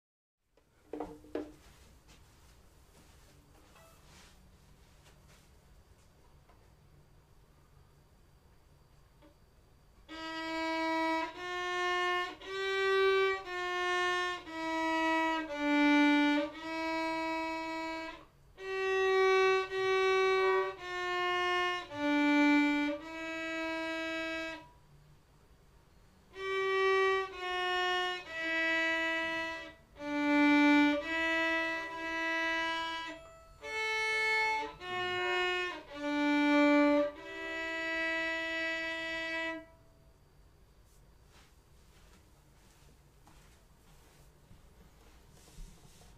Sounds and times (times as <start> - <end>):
Violin, fiddle: 10.1 - 24.7, 26.3 - 39.8.